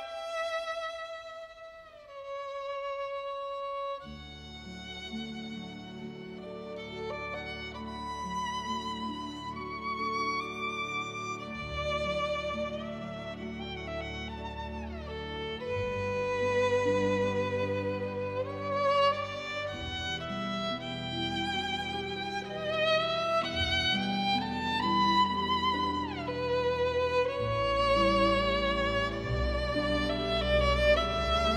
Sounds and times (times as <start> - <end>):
String section: 0.0 - 31.5.